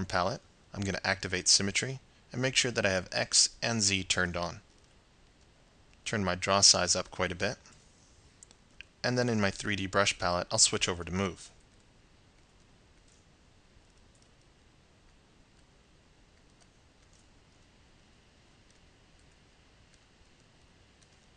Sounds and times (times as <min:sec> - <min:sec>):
Speech: 0:00.0 - 0:04.6, 0:06.1 - 0:07.7, 0:09.0 - 0:11.6.